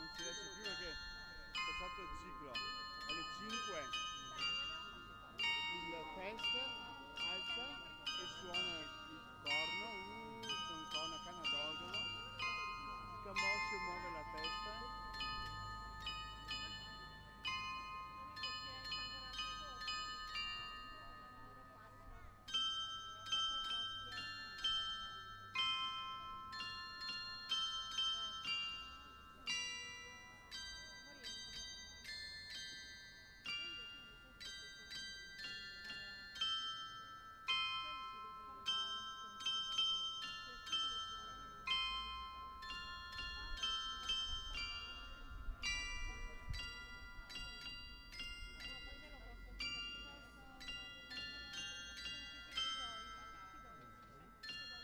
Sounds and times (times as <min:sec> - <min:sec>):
Music: 0:00.0 - 0:54.8.